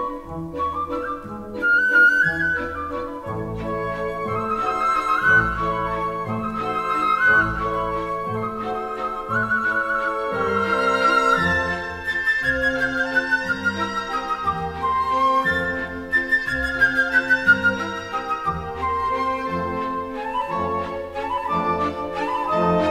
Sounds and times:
Music: 0:00.0 - 0:22.9.

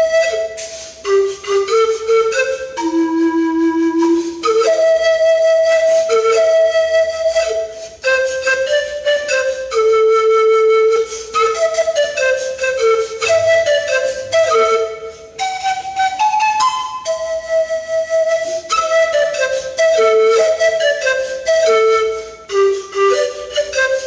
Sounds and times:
Wind instrument, woodwind instrument: 0:00.0 - 0:24.0.

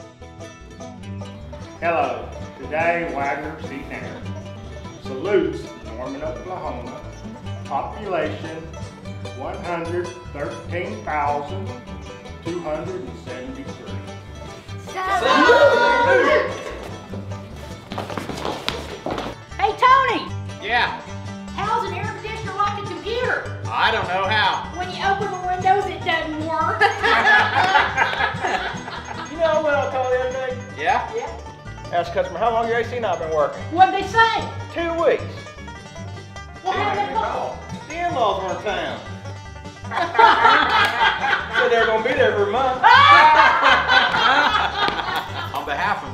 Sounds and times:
Music: 0:00.0 - 0:46.1.

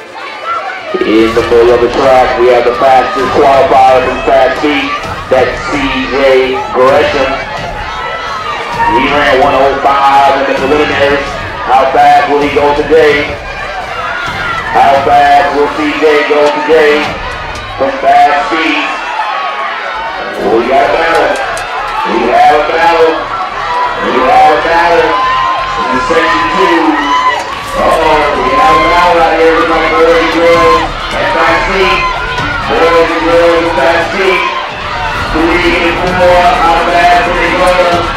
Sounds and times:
Speech: 0:00.9 - 0:07.5, 0:08.8 - 0:13.4, 0:14.8 - 0:17.2, 0:17.8 - 0:19.0, 0:20.2 - 0:23.3, 0:24.0 - 0:27.1, 0:27.8 - 0:34.6, 0:35.3 - 0:38.1.

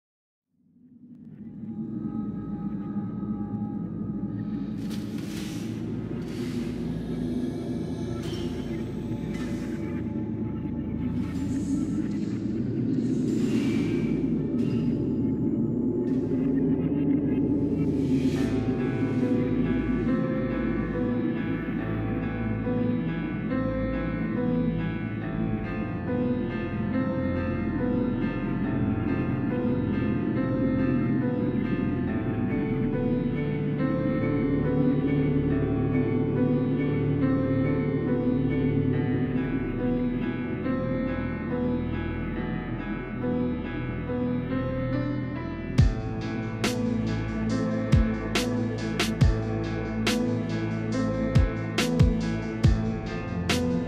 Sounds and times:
Music: 0:00.5 - 0:53.8.

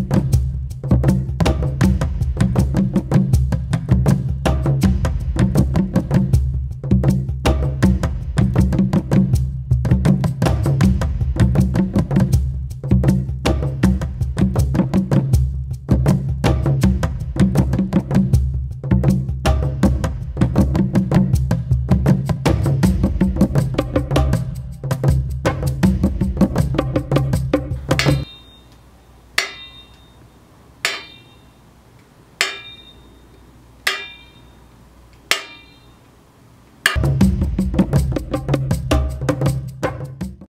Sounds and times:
Music: 0:00.0 - 0:28.3, 0:36.9 - 0:40.4.

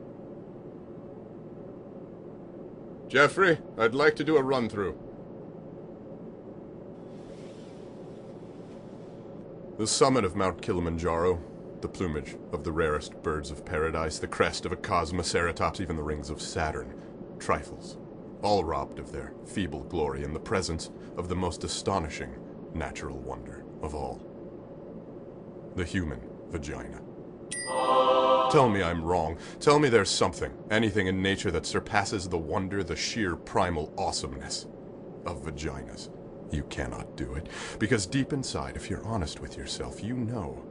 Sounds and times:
Speech: 0:03.1 - 0:05.0, 0:09.8 - 0:24.2, 0:25.8 - 0:27.1, 0:28.4 - 0:40.7
Music: 0:27.5 - 0:29.0.

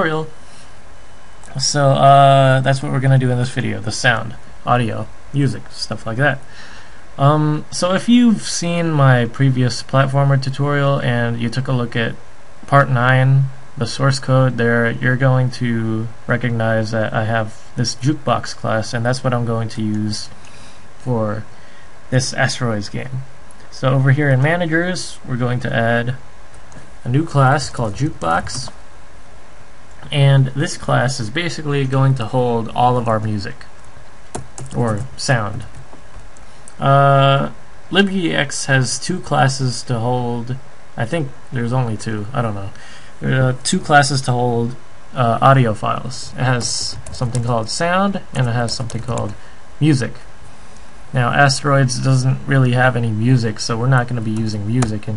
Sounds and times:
Speech: 0:00.0 - 0:00.4, 0:01.5 - 0:06.5, 0:07.2 - 0:20.4, 0:21.0 - 0:21.5, 0:22.1 - 0:26.2, 0:27.0 - 0:28.8, 0:30.0 - 0:33.8, 0:34.7 - 0:35.8, 0:36.8 - 0:50.3, 0:51.1 - 0:55.1.

